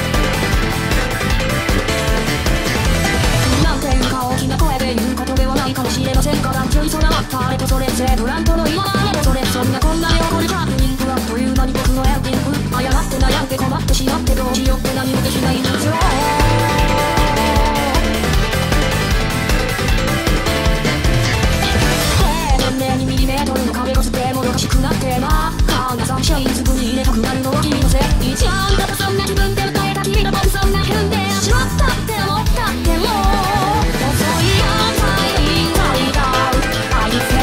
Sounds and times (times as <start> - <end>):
Music: 0.0 - 37.4.